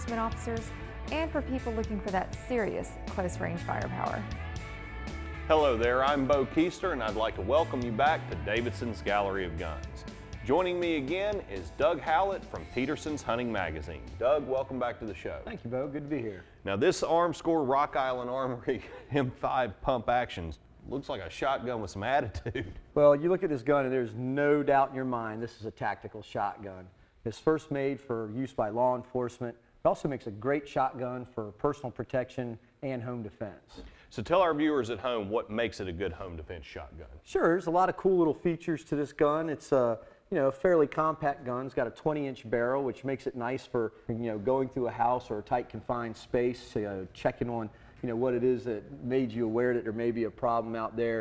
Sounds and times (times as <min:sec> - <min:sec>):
Music: 0:00.0 - 0:18.8
Speech: 0:05.5 - 0:51.2.